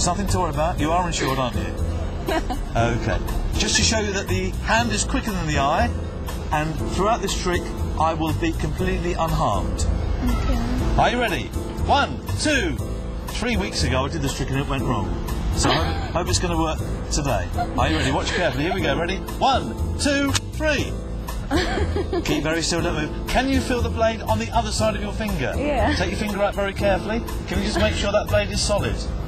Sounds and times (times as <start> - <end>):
Music: 0.0 - 29.2
Speech: 25.6 - 26.1.